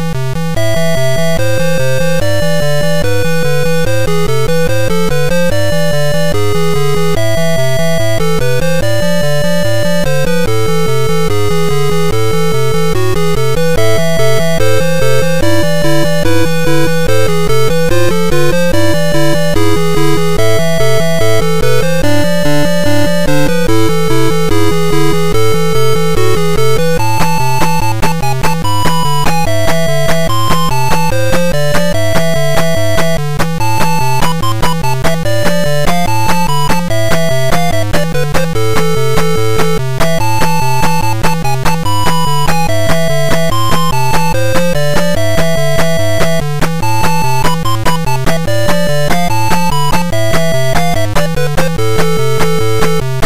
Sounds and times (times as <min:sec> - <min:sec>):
Music: 0:00.0 - 0:53.2.